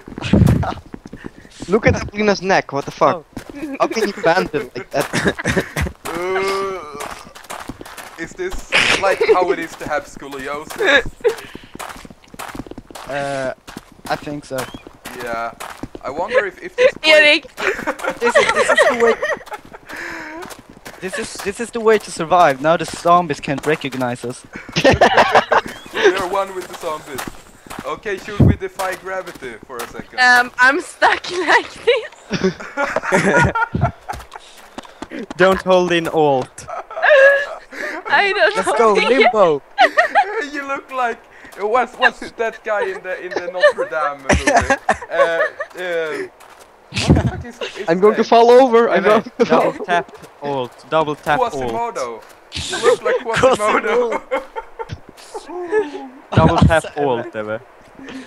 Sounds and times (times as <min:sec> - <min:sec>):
Walk, footsteps: 0:00.0 - 0:02.2, 0:02.8 - 0:04.2, 0:05.0 - 0:30.6, 0:31.3 - 0:36.8, 0:43.6 - 0:47.4, 0:50.0 - 0:52.9
Speech: 0:01.6 - 0:07.1, 0:08.2 - 0:11.0, 0:13.1 - 0:19.3, 0:27.9 - 0:32.1, 0:37.4 - 0:39.6, 0:40.3 - 0:46.3, 0:47.0 - 0:54.2, 0:55.3 - 0:57.6.